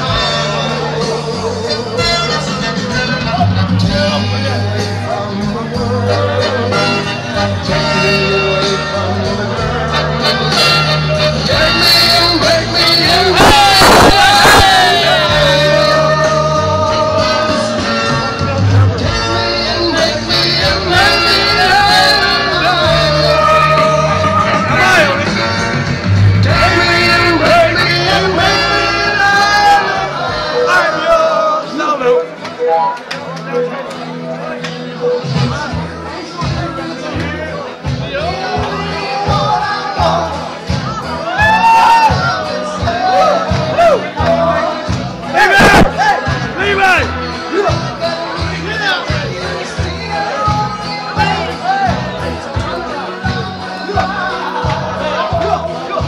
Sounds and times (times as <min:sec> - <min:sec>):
Inside, large room or hall: 0:00.0 - 0:56.0
Music: 0:00.0 - 0:56.0.